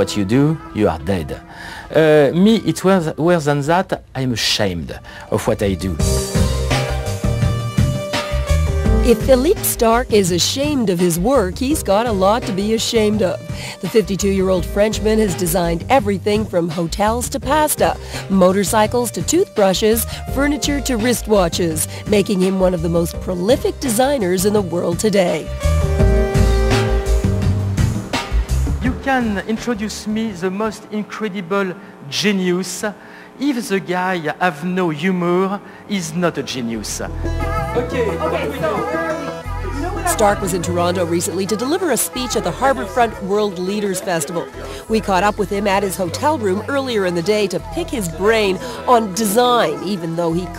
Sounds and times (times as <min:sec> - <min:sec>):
Speech: 0:00.0 - 0:06.0, 0:09.1 - 0:25.5, 0:28.8 - 0:37.1, 0:39.7 - 0:50.5
Music: 0:00.0 - 0:50.5.